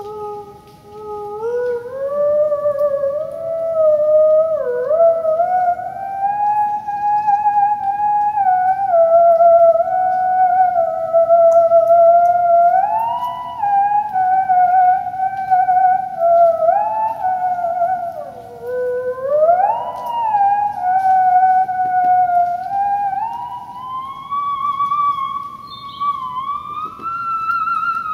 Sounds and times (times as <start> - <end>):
Theremin: 0.0 - 28.1.